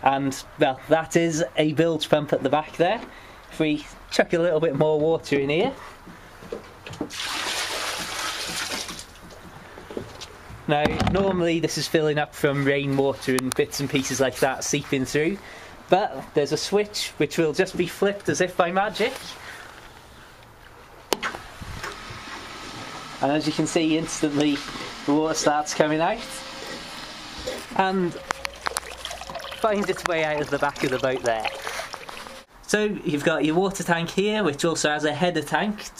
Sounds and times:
Speech: 0:00.0 - 0:05.8, 0:10.7 - 0:19.4, 0:23.2 - 0:26.4, 0:27.8 - 0:28.2, 0:29.6 - 0:31.5, 0:32.7 - 0:36.0
Water: 0:07.1 - 0:09.4, 0:28.1 - 0:32.5
Trickle, dribble: 0:28.2 - 0:32.5.

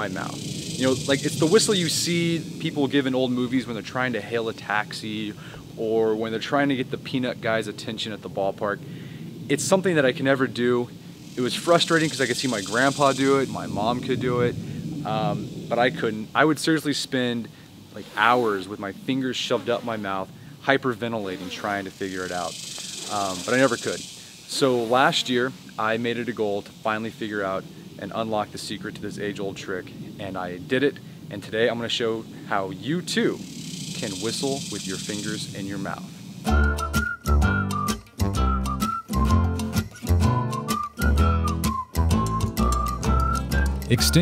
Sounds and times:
Speech: 0:00.0 - 0:08.8, 0:09.5 - 0:33.4, 0:34.0 - 0:36.1, 0:43.9 - 0:44.2.

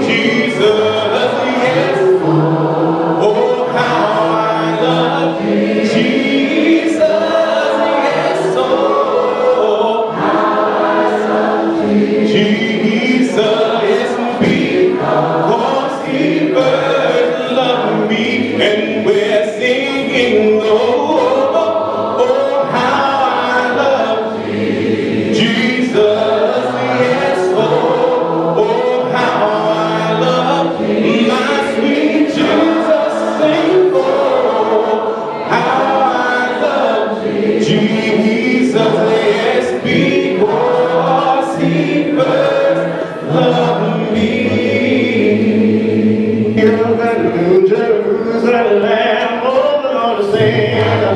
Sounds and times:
Male singing: 0:00.0 - 0:02.3, 0:03.2 - 0:10.2, 0:12.2 - 0:24.3, 0:25.3 - 0:45.6, 0:46.5 - 0:51.1
Choir: 0:00.0 - 0:51.1.

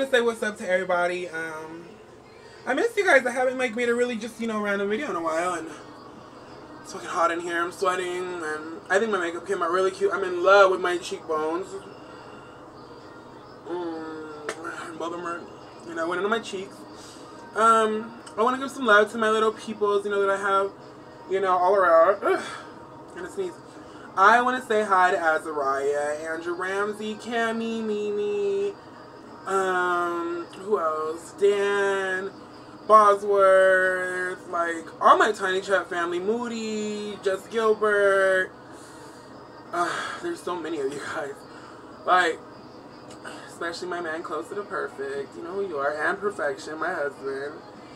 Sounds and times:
Speech: 0:00.0 - 0:02.0, 0:02.6 - 0:05.9, 0:06.8 - 0:11.9, 0:13.7 - 0:16.8, 0:17.6 - 0:23.6, 0:24.2 - 0:28.8, 0:29.5 - 0:38.5, 0:39.8 - 0:41.4, 0:42.0 - 0:42.4, 0:43.2 - 0:47.6
Music: 0:00.0 - 0:47.9.

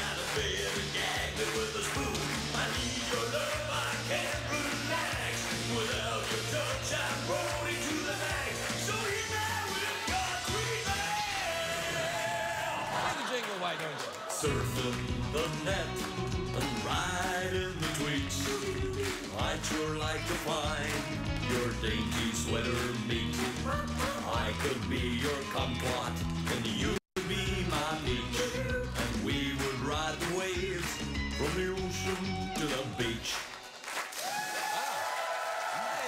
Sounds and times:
Music: 0:00.0 - 0:13.2, 0:14.3 - 0:34.2.

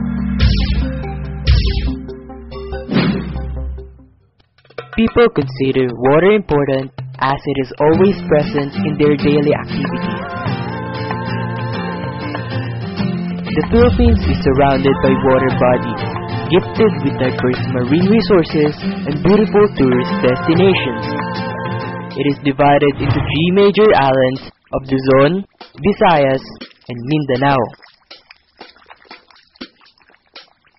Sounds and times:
Music: 0:00.0 - 0:22.5
Speech: 0:05.0 - 0:10.0, 0:13.6 - 0:21.0, 0:22.2 - 0:27.8.

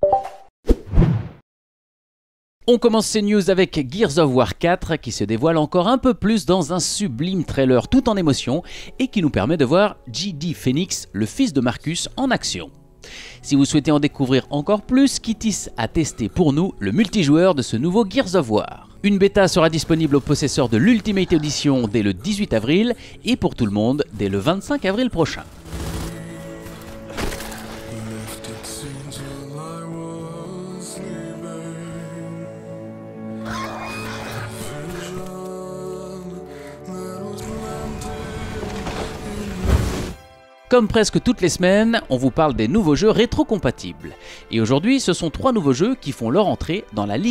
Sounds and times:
Music: 0:02.8 - 0:47.3.

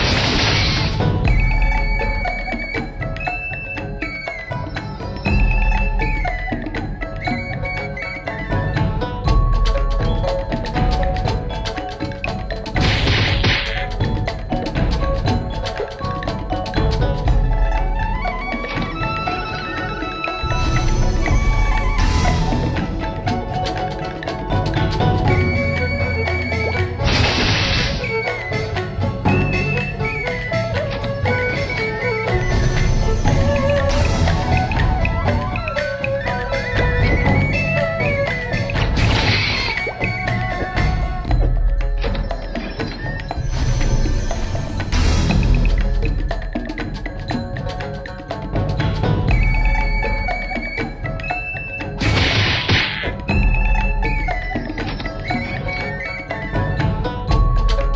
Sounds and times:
Music: 0:00.0 - 0:57.9.

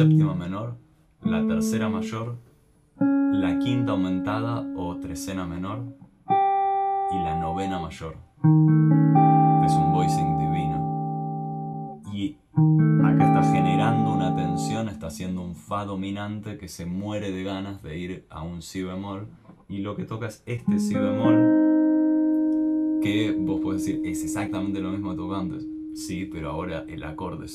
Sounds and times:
Speech: 0:00.0 - 0:02.4, 0:03.3 - 0:06.0, 0:07.1 - 0:08.3, 0:09.6 - 0:10.9, 0:12.0 - 0:12.4, 0:13.0 - 0:21.5, 0:23.0 - 0:27.5
Electric guitar: 0:01.2 - 0:02.2, 0:03.0 - 0:15.2, 0:20.7 - 0:27.5.

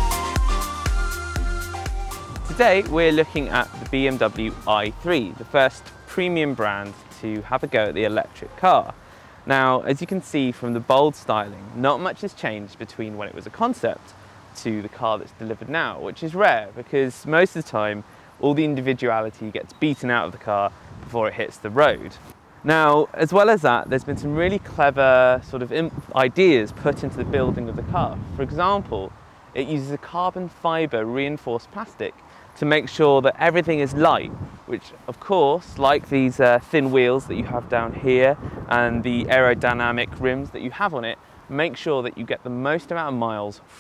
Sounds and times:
Speech: 0:02.5 - 0:43.7.

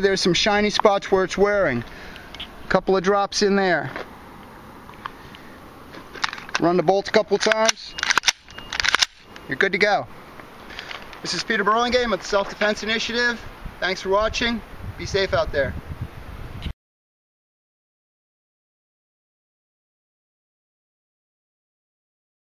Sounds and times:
Speech: 0:00.0 - 0:01.9, 0:02.7 - 0:04.0, 0:06.6 - 0:07.9, 0:09.5 - 0:10.1, 0:11.2 - 0:15.8
Outside, urban or manmade: 0:00.0 - 0:16.8.

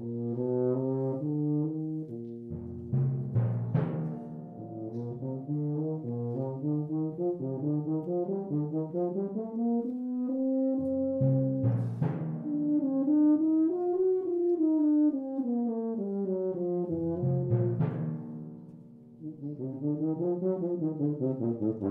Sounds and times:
Brass instrument: 0:00.0 - 0:21.9.

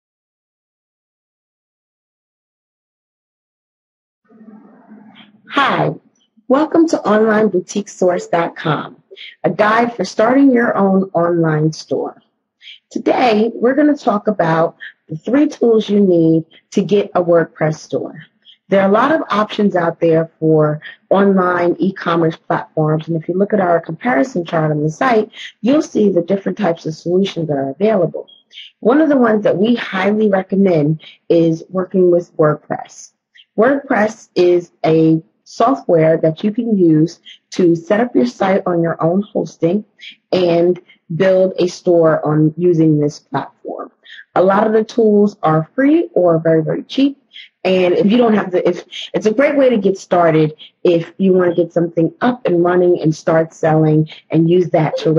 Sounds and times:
Speech: 0:04.3 - 0:55.1.

